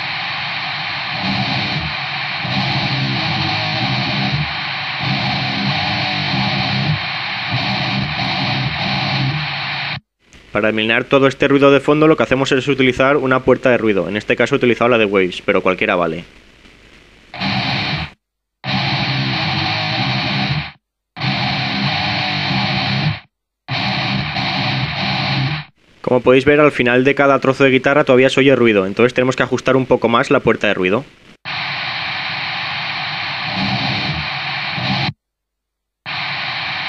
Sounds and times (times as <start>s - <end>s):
Music: 1.2s - 9.9s, 18.7s - 25.7s
Speech: 10.5s - 16.3s, 26.0s - 31.1s.